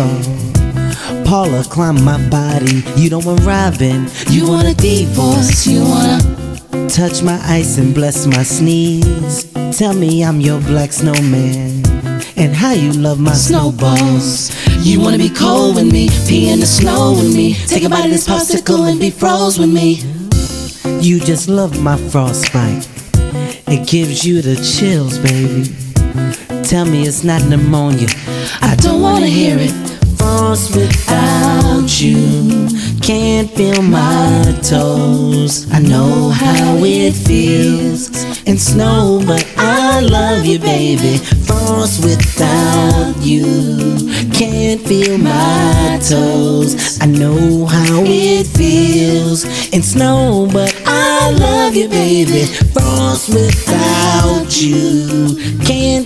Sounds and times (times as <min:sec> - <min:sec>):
Music: 0:00.0 - 0:56.0
Singing: 0:01.3 - 0:11.7, 0:12.4 - 0:22.9, 0:26.7 - 0:56.0.